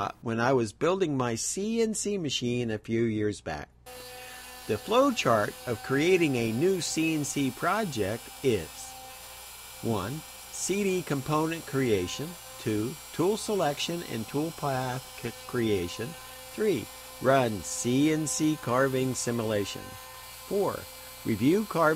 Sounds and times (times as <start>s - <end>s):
Speech: 0.0s - 3.7s, 4.7s - 9.0s, 9.8s - 21.9s.